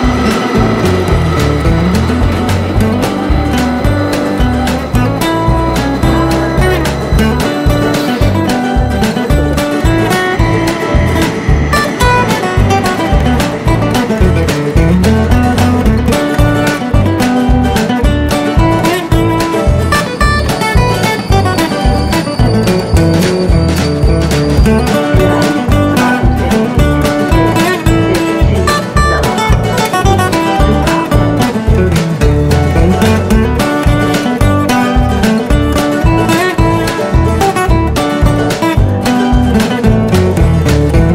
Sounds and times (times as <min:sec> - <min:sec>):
Music: 0:00.0 - 0:41.1.